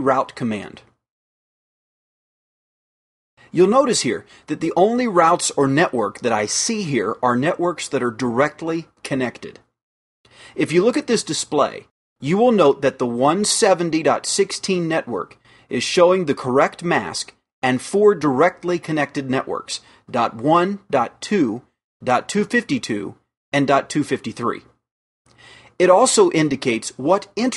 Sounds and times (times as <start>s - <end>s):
Speech: 0.0s - 1.0s, 3.5s - 9.7s, 10.6s - 24.8s, 25.8s - 27.5s.